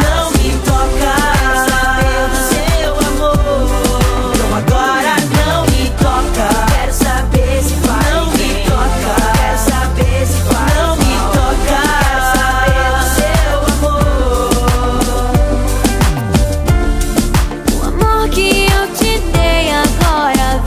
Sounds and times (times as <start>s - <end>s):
Music of Africa: 0.0s - 20.6s
Rhythm and blues: 0.0s - 20.6s.